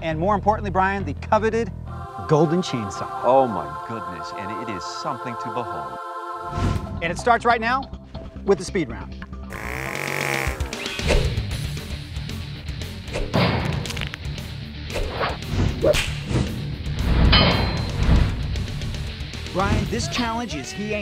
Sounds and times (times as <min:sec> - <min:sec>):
Music: 0:00.0 - 0:21.0.